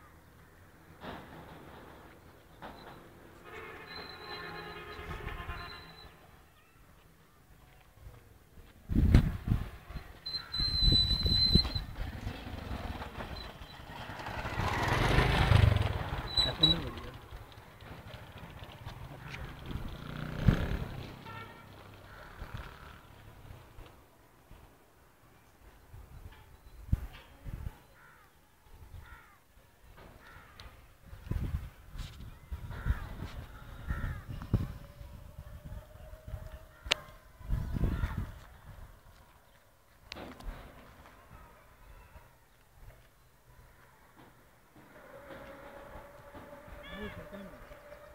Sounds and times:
Outside, rural or natural: 0.0s - 48.1s.

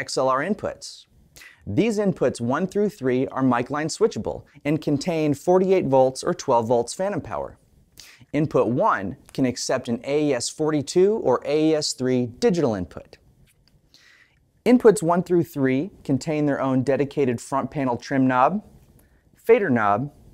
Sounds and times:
Speech: 0.0s - 7.6s, 8.3s - 13.2s, 14.6s - 18.7s, 19.4s - 20.2s.

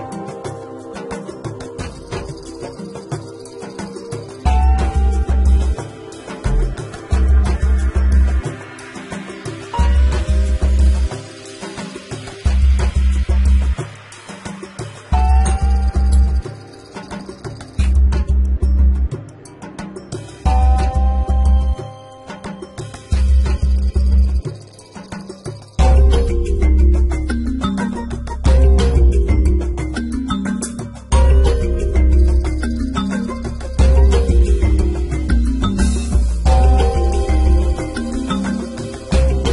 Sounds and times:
Music: 0.0s - 39.5s.

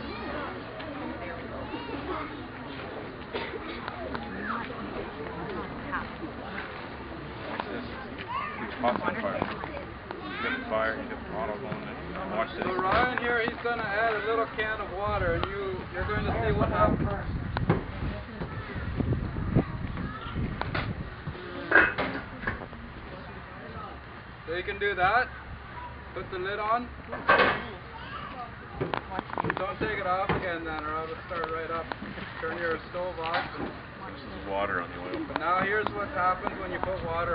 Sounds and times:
Fire: 0.0s - 37.3s
Wind noise (microphone): 15.1s - 21.5s, 36.8s - 37.3s.

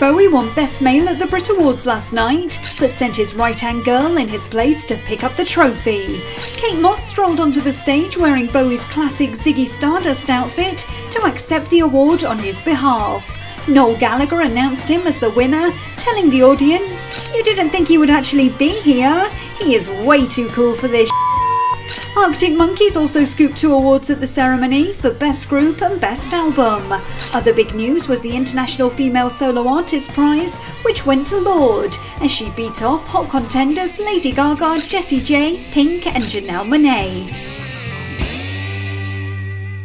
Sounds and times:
Speech: 0.0s - 21.1s, 22.2s - 37.3s
Music: 0.0s - 39.8s.

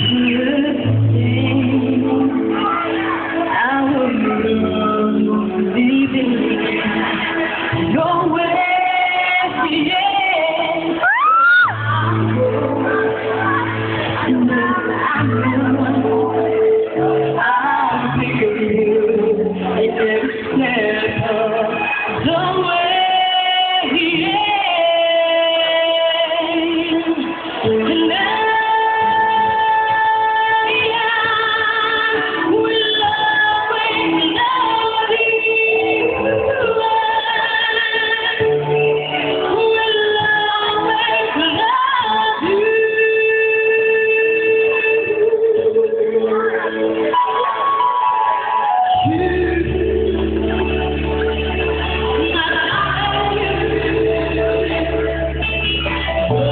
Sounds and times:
Female singing: 0.0s - 56.5s
Music: 0.0s - 56.5s.

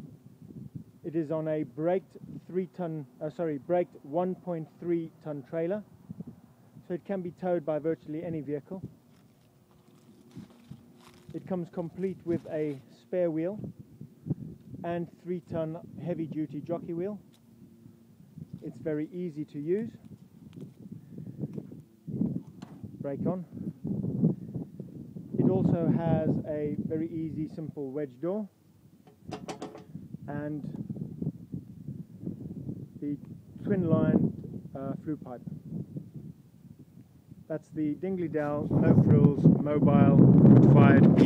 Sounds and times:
Speech: 1.1s - 5.9s, 6.8s - 8.9s, 11.3s - 13.6s, 14.8s - 17.2s, 18.6s - 20.0s, 23.0s - 23.5s, 25.4s - 28.5s, 30.3s - 30.8s, 33.0s - 35.5s, 37.5s - 41.2s.

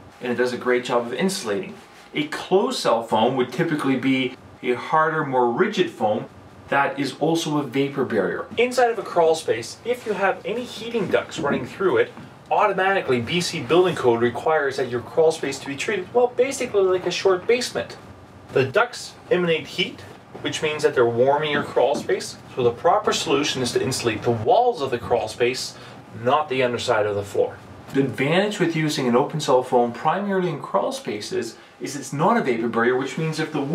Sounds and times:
Speech: 0.2s - 33.7s.

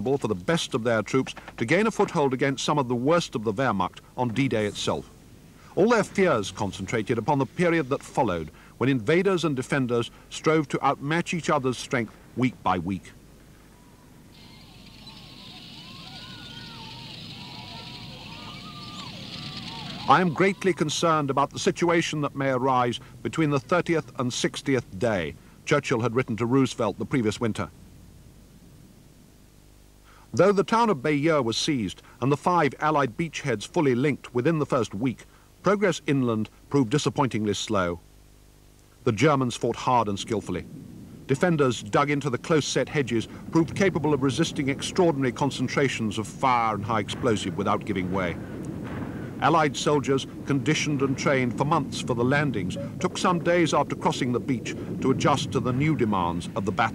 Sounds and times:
Speech: 0.0s - 13.2s, 15.8s - 27.7s, 30.3s - 38.0s, 39.0s - 40.7s, 41.3s - 48.4s, 49.4s - 56.9s
Outside, rural or natural: 0.0s - 56.9s.

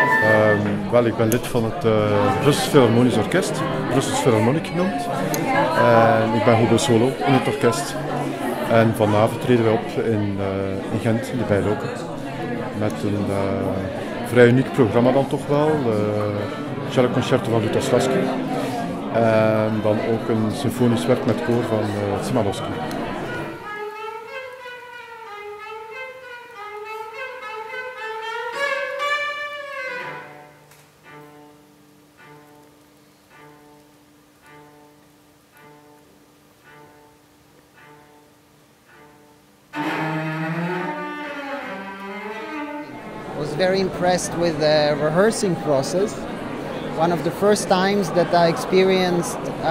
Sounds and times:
Speech: 0.0s - 23.1s, 43.4s - 46.2s, 47.0s - 49.7s.

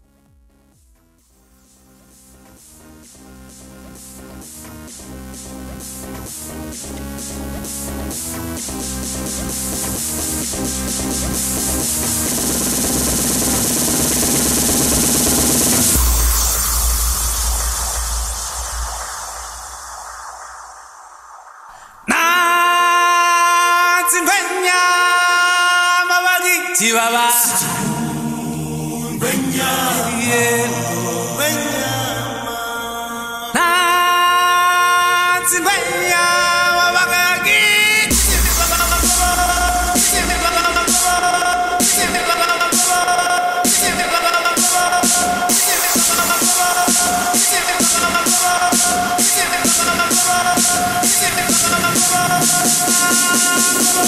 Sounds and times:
Music: 0.0s - 20.0s, 22.1s - 54.0s.

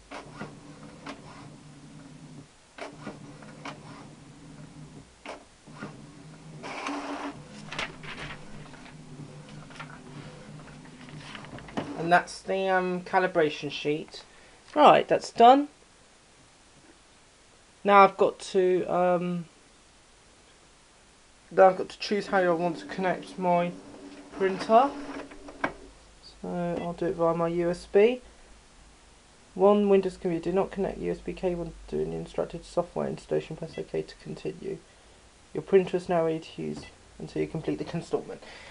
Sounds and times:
Printer: 0.1s - 12.0s, 22.7s - 25.7s.

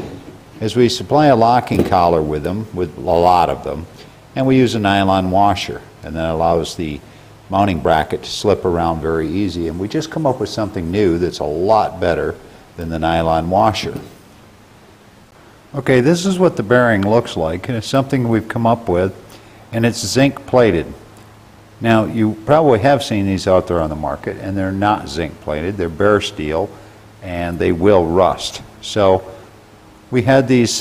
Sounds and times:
Speech: 0.0s - 14.2s, 15.7s - 21.0s, 21.8s - 29.4s, 30.1s - 30.8s.

